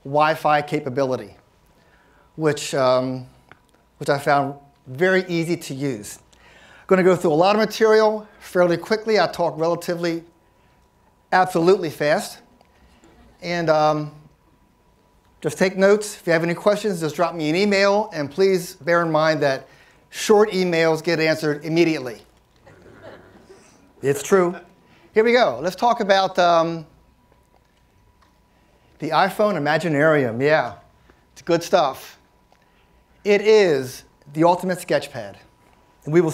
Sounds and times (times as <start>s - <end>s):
Speech: 0.0s - 1.4s, 2.4s - 3.4s, 4.0s - 6.3s, 6.9s - 10.3s, 11.3s - 12.5s, 13.4s - 14.3s, 15.4s - 22.3s, 24.0s - 26.9s, 29.0s - 32.2s, 33.2s - 36.3s.